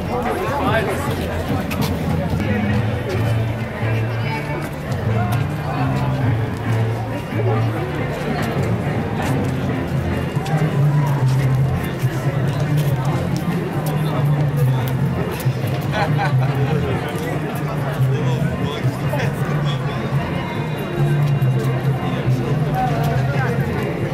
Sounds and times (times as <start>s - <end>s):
Music: 0.0s - 24.1s
Speech: 0.0s - 24.1s.